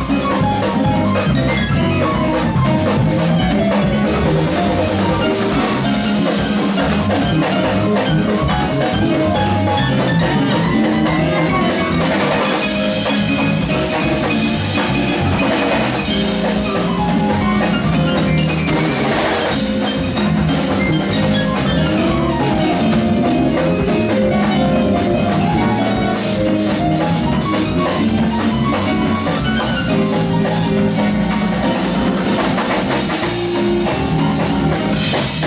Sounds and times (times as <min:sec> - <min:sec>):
Drum: 0:00.0 - 0:35.4
Drum kit: 0:00.0 - 0:35.4
Guitar: 0:00.0 - 0:35.4.